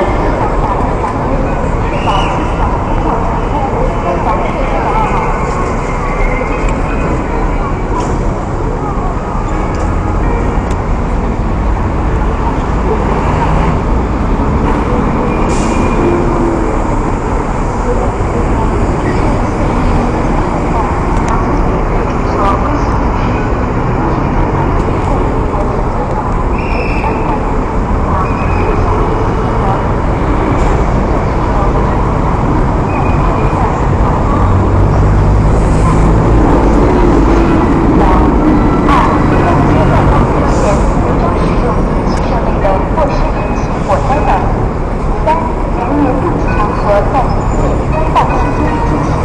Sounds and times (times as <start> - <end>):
Motor vehicle (road): 0.0 - 49.2.